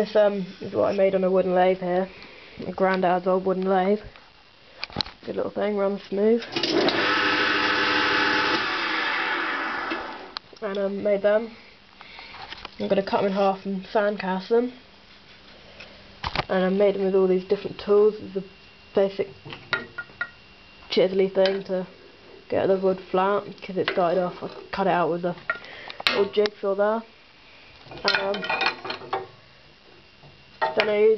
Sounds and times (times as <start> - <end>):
Speech: 0.0 - 4.1, 5.2 - 6.5, 10.6 - 11.6, 12.8 - 14.8, 16.5 - 19.3, 20.9 - 21.9, 22.5 - 25.4, 26.1 - 27.1, 28.0 - 28.6, 30.7 - 31.1.